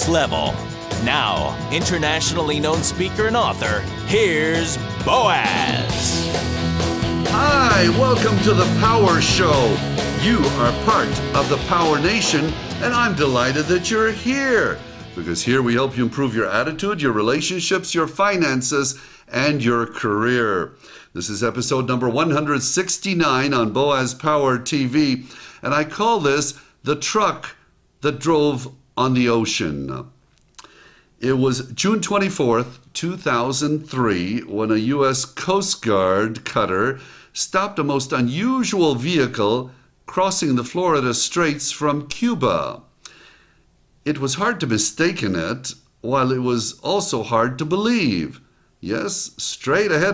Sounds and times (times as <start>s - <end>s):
Speech: 0.0s - 6.3s, 7.3s - 30.2s, 31.2s - 42.9s, 44.1s - 50.1s.